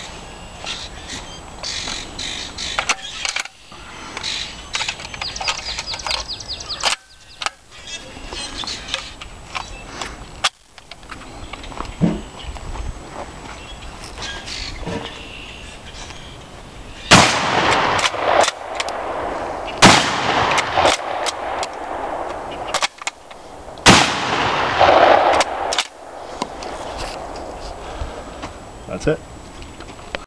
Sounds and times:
Speech: 28.9s - 29.2s.

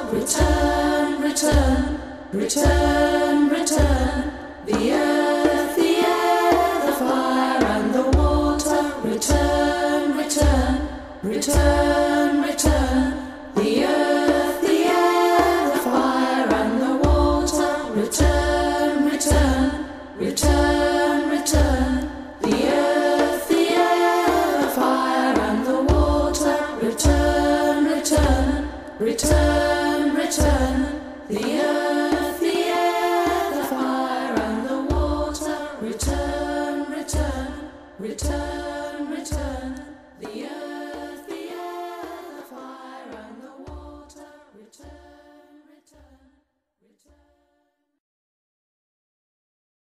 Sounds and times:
Vocal music: 0.0s - 46.3s.

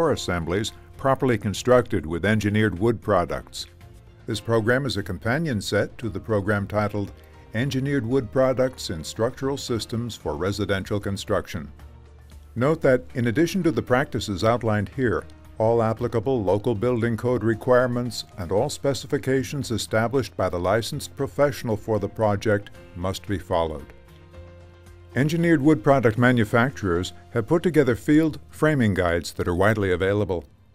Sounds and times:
Speech: 0.0s - 3.7s, 4.3s - 11.8s, 12.6s - 23.9s, 25.2s - 30.6s
Music: 0.0s - 30.7s.

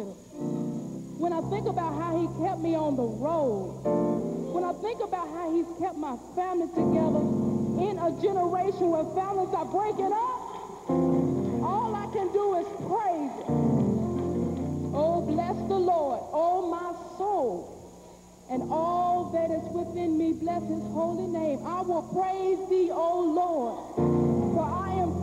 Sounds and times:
Music: 0.0s - 25.2s
Speech: 1.2s - 3.7s, 4.6s - 10.6s, 11.6s - 13.5s, 15.0s - 17.7s, 18.5s - 23.8s.

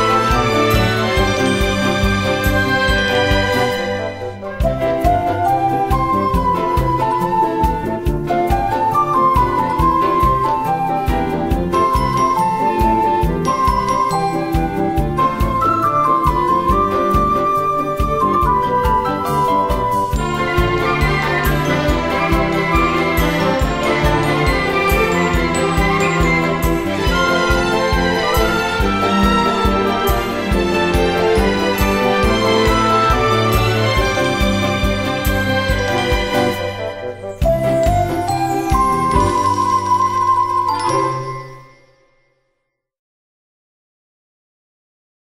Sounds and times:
Music: 0.0s - 42.9s.

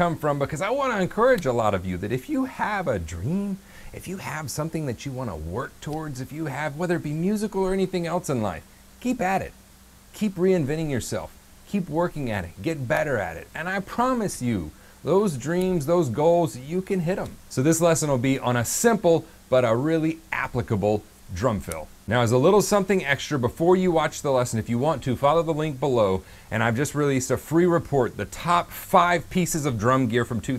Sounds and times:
Speech: 0.0s - 30.5s.

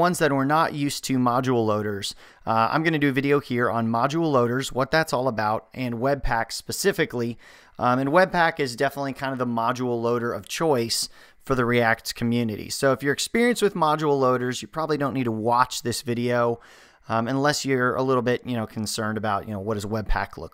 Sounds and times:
Speech: 0.0s - 20.5s.

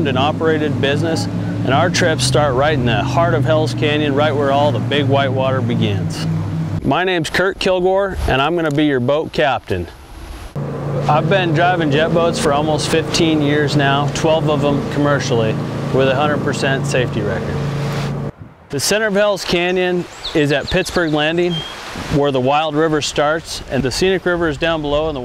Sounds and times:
Motorboat, speedboat: 0.0s - 7.0s, 10.5s - 18.4s
Speech: 0.0s - 10.0s, 11.1s - 17.6s, 18.7s - 25.2s.

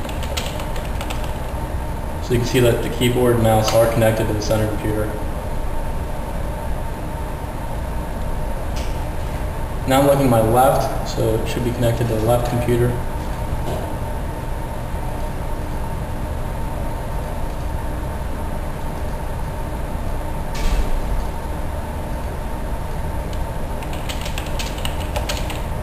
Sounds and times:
Speech: 2.2s - 5.2s, 9.9s - 13.0s.

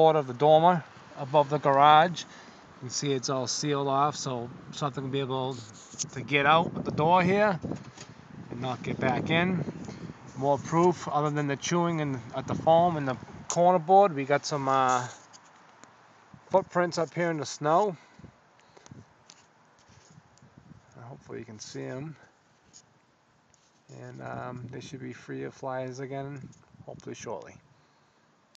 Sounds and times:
Speech: 0.0s - 7.6s, 8.5s - 9.7s, 10.4s - 15.2s, 16.5s - 18.0s, 20.9s - 22.3s, 23.9s - 27.6s.

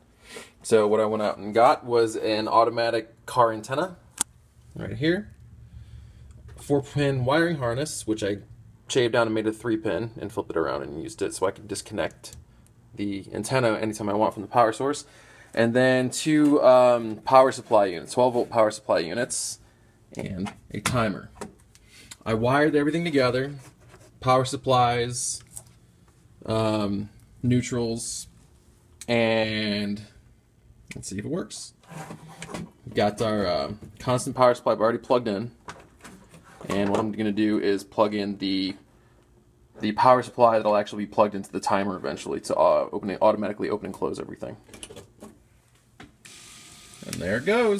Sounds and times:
Speech: 0.6s - 4.0s, 4.7s - 5.4s, 6.6s - 12.4s, 13.0s - 21.4s, 22.2s - 25.5s, 26.4s - 28.3s, 29.0s - 30.2s, 30.9s - 31.8s, 32.9s - 35.6s, 36.6s - 38.8s, 39.8s - 44.7s, 47.0s - 47.7s.

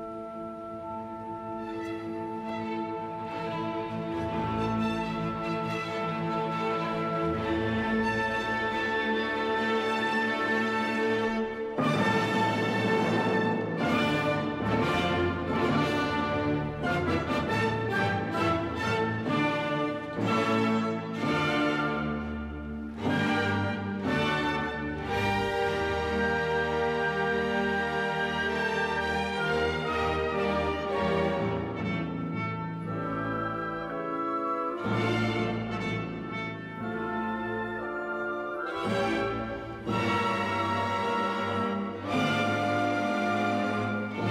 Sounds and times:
Music: 0.0s - 44.3s.

